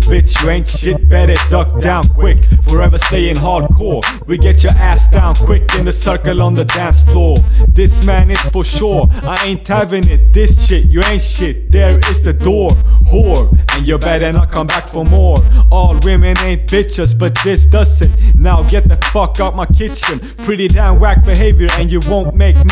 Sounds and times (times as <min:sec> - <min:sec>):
Music: 0:00.0 - 0:22.7.